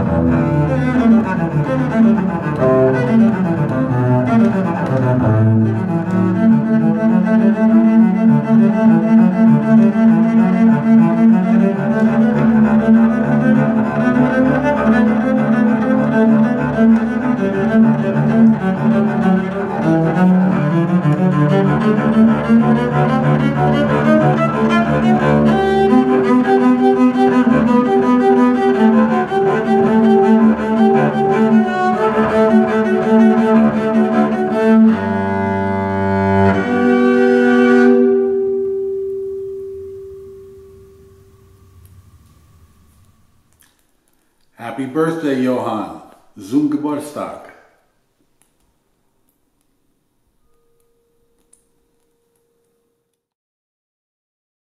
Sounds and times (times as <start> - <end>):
Bowed string instrument: 0.0 - 47.4
Speech: 44.6 - 47.7.